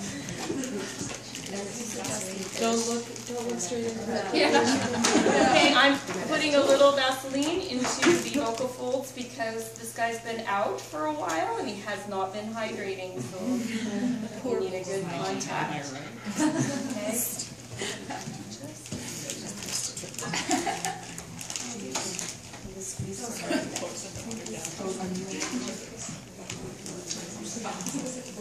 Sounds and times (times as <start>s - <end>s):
Female speech, woman speaking: 1.3s - 16.0s, 16.6s - 17.6s, 21.6s - 28.4s.